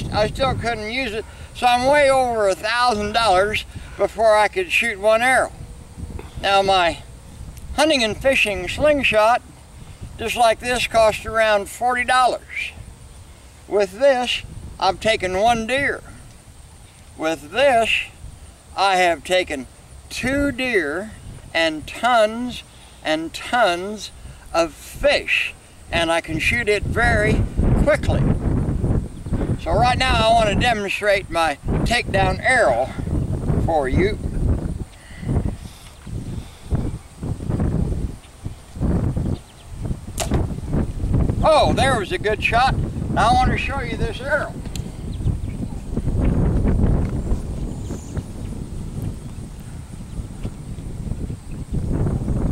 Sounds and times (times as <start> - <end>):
Speech: 0.0 - 5.5, 6.4 - 7.0, 7.8 - 9.4, 10.2 - 12.8, 13.7 - 16.1, 17.2 - 18.2, 18.8 - 28.3, 29.6 - 33.0, 33.6 - 34.2, 41.4 - 44.6.